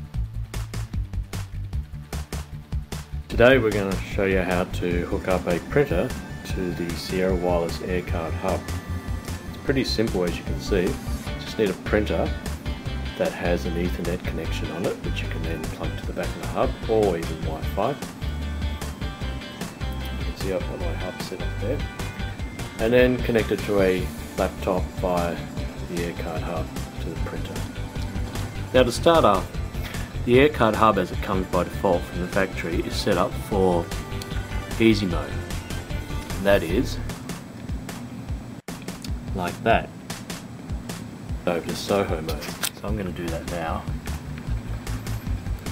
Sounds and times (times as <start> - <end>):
Music: 0.0 - 45.7
Speech: 3.3 - 8.7, 9.6 - 12.4, 13.2 - 18.0, 20.3 - 21.9, 22.8 - 27.7, 28.8 - 29.5, 30.2 - 33.9, 34.7 - 35.4, 36.4 - 37.1, 39.3 - 39.9, 41.4 - 43.9.